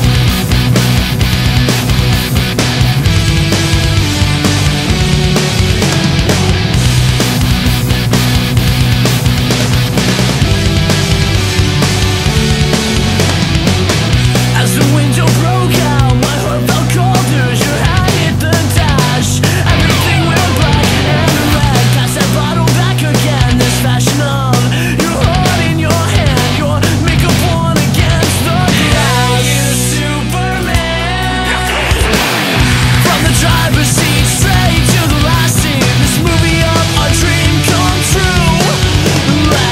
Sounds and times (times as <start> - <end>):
Music: 0.0 - 39.7.